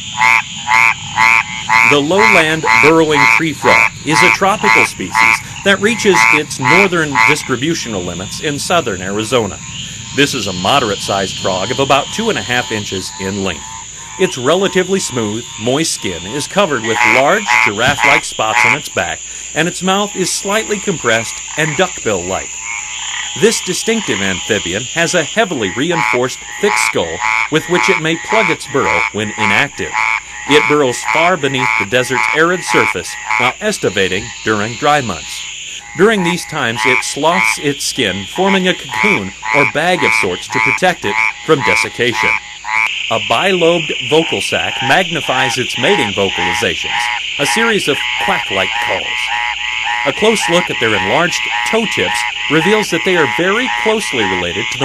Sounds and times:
Croak: 0.0s - 54.8s.

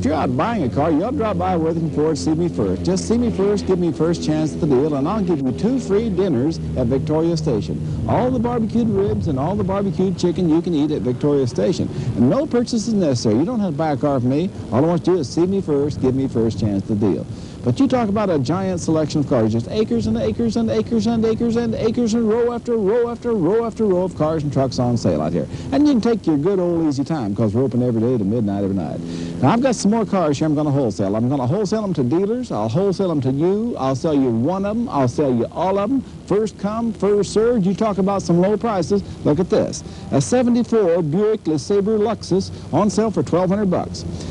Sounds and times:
Speech: 0.0s - 44.1s.

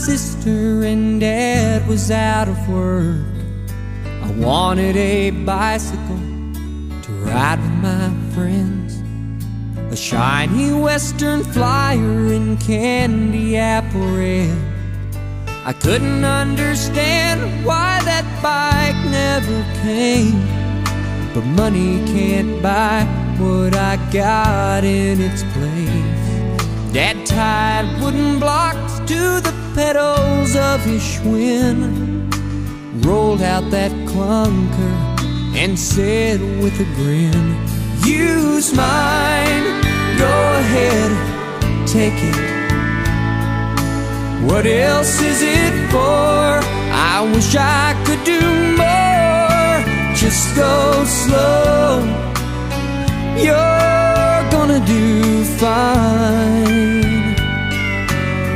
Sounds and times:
Music: 0.0s - 58.5s.

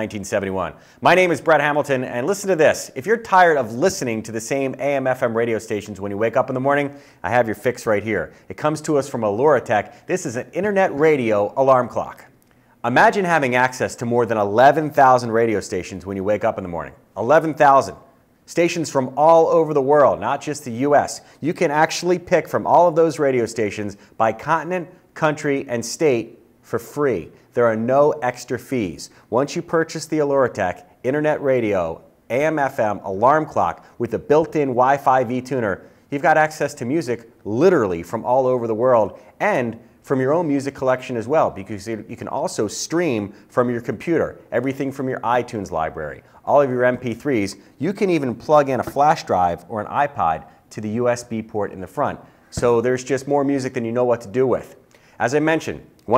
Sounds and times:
Speech: 0.0s - 56.1s.

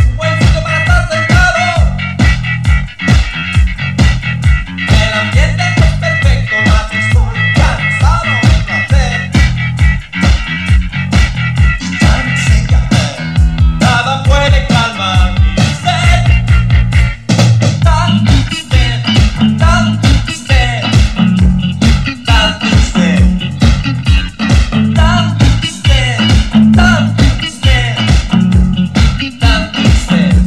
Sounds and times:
Music: 0.0s - 30.4s.

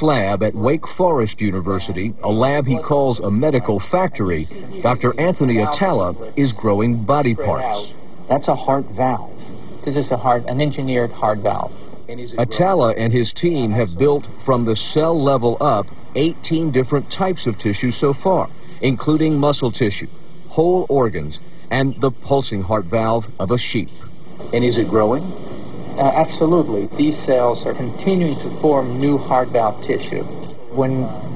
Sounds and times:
Speech: 0.0s - 25.3s, 26.0s - 31.3s.

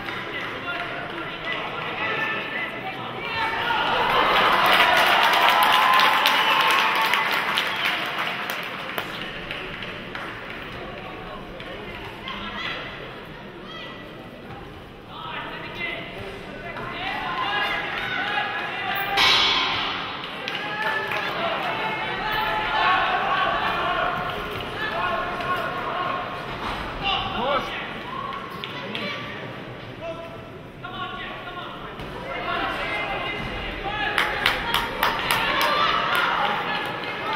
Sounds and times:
Inside, public space: 0.0s - 37.3s.

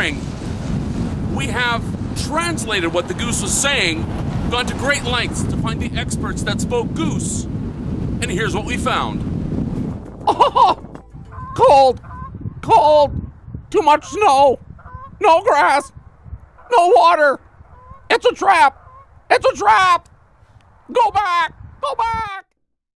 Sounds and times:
Speech: 0.0s - 0.2s, 1.4s - 7.5s, 8.2s - 9.2s, 11.6s - 12.0s, 12.6s - 13.1s, 13.7s - 14.6s, 15.2s - 15.9s, 16.7s - 17.4s, 18.1s - 20.0s, 20.9s - 22.5s.

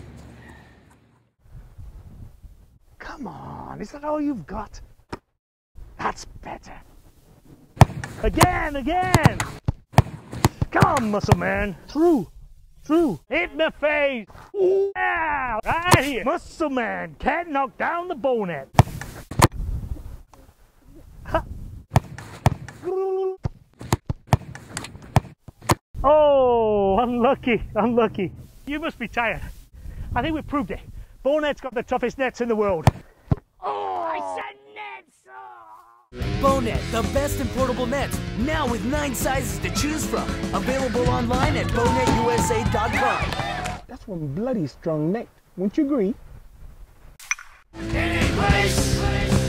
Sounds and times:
Speech: 3.0s - 4.8s, 6.0s - 6.9s, 8.2s - 9.4s, 10.7s - 12.3s, 12.9s - 18.7s, 26.0s - 29.5s, 30.2s - 32.9s, 33.6s - 46.2s.

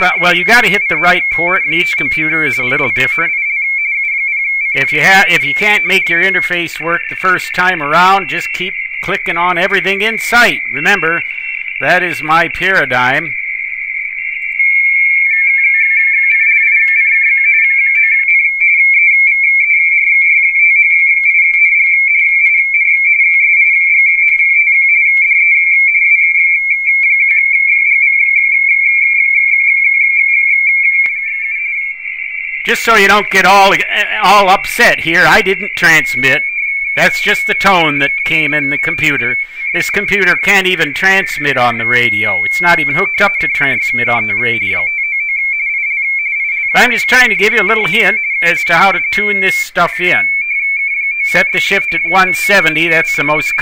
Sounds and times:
Speech: 0.0s - 3.3s, 4.8s - 11.2s, 11.8s - 13.4s, 32.7s - 36.4s, 37.0s - 44.9s, 46.7s - 50.4s, 51.2s - 53.6s.

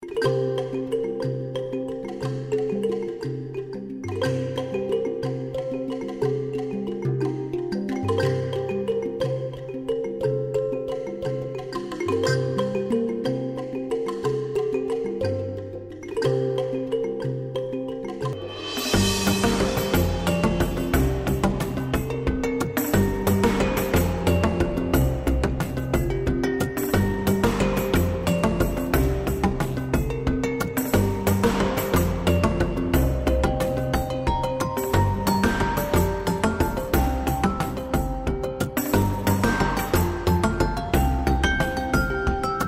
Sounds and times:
Music: 0.0s - 42.6s.

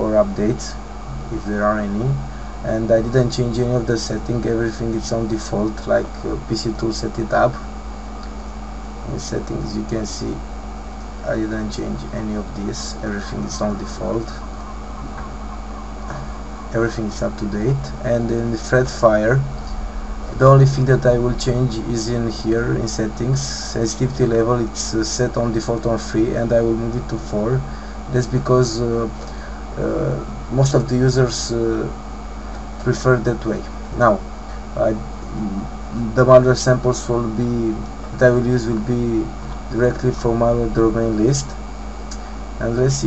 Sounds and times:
Speech: 0.0s - 7.7s, 9.0s - 10.4s, 11.2s - 14.4s, 16.1s - 32.0s, 32.8s - 43.0s.

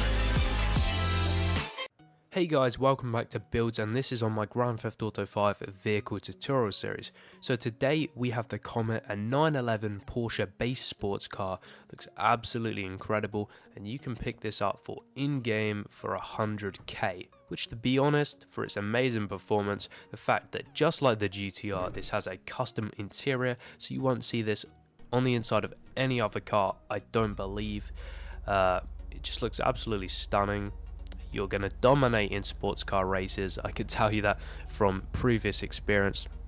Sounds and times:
Speech: 2.4s - 27.9s, 28.5s - 36.3s.

